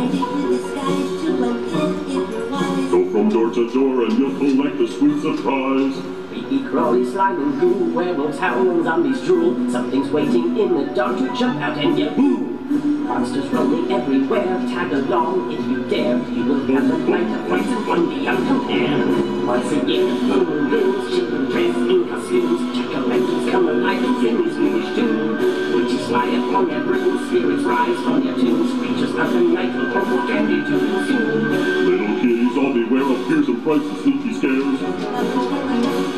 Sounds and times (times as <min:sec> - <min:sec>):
Male singing: 0:00.0 - 0:12.1, 0:13.2 - 0:36.1
Music: 0:00.0 - 0:36.1.